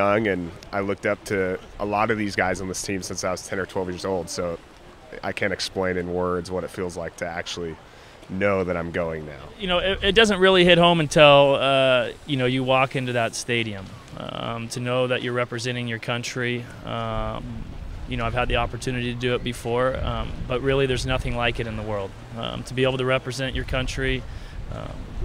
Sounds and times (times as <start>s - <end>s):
Speech: 0.0s - 25.2s.